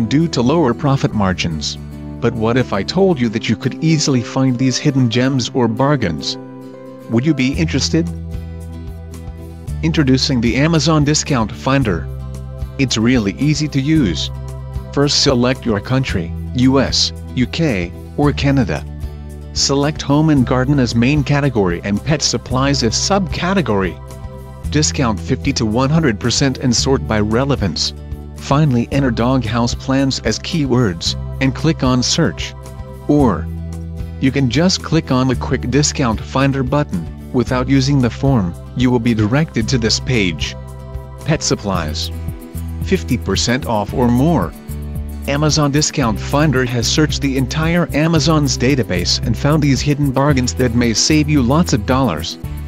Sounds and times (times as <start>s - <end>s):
Speech: 0.0s - 6.4s, 7.0s - 8.2s, 9.8s - 12.1s, 12.8s - 14.3s, 15.0s - 18.9s, 19.6s - 24.0s, 24.7s - 33.5s, 34.2s - 40.6s, 41.2s - 42.2s, 42.8s - 44.6s, 45.3s - 52.4s
Music: 0.0s - 52.6s.